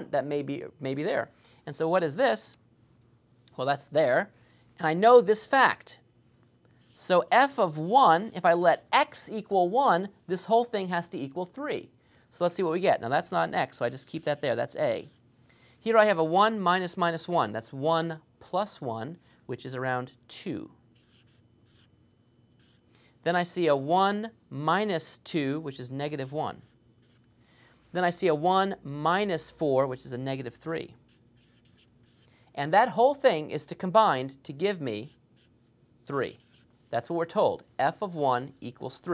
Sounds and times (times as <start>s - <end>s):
Speech: 0.0s - 2.6s, 3.5s - 6.0s, 7.0s - 15.2s, 15.8s - 20.8s, 23.2s - 26.8s, 27.9s - 31.0s, 32.6s - 35.2s, 36.0s - 39.1s
Writing: 21.0s - 22.9s, 26.2s - 27.4s, 30.6s - 32.4s, 35.0s - 36.9s.